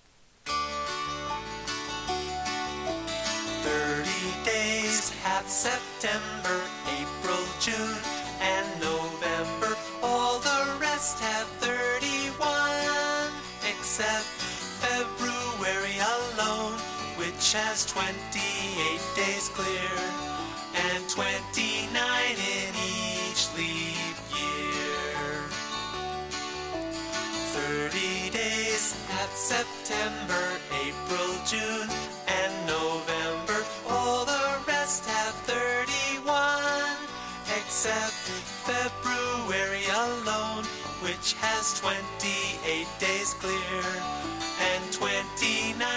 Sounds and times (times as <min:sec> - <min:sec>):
Music: 0:00.5 - 0:45.9.